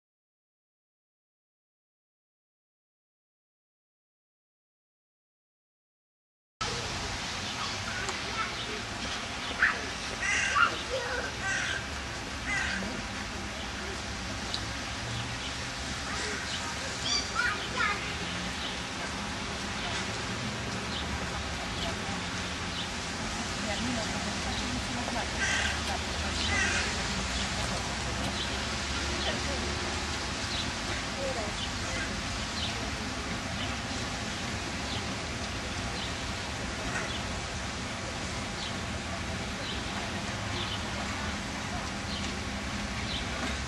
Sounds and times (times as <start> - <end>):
Speech: 6.6 - 11.8, 16.1 - 20.3, 20.9 - 22.4, 23.4 - 30.2, 30.9 - 34.0
Railroad car, train wagon: 6.6 - 43.6.